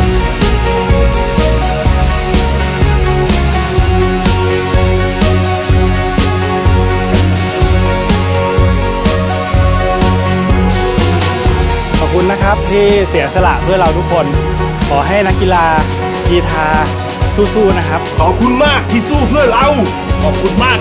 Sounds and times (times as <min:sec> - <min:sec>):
Music: 0:00.0 - 0:20.8.